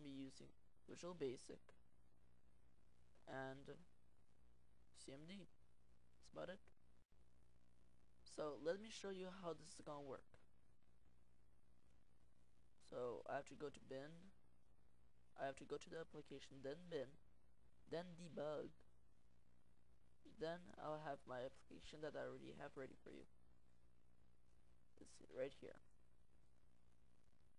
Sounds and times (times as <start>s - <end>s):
Speech: 0.0s - 1.8s, 3.2s - 3.9s, 5.0s - 5.6s, 6.2s - 6.7s, 8.3s - 10.5s, 12.8s - 14.4s, 15.4s - 17.2s, 17.9s - 18.9s, 20.2s - 23.3s, 25.0s - 25.9s.